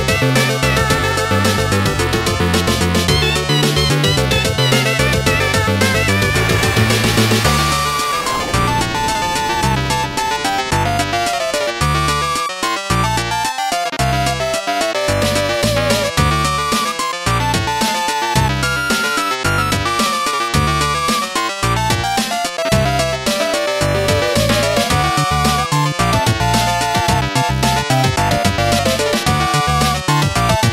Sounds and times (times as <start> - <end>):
Music: 0.0 - 30.7.